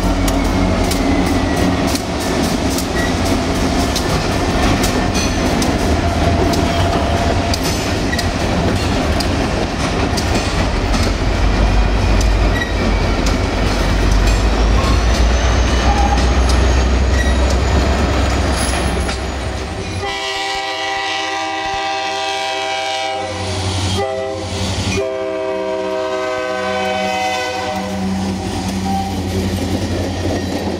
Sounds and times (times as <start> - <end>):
Railroad car, train wagon: 0.0 - 30.7
Clickety-clack: 0.2 - 19.4, 28.2 - 30.7
Train horn: 19.9 - 29.2.